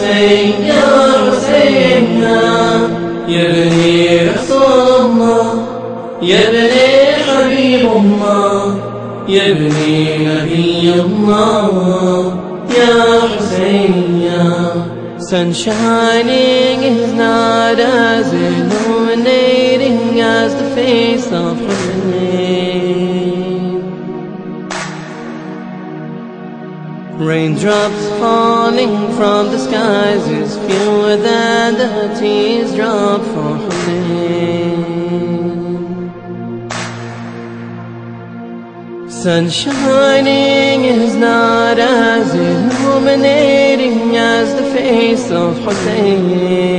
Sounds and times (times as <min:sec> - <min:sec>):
Mantra: 0:00.0 - 0:23.9, 0:27.2 - 0:36.0, 0:39.1 - 0:46.7.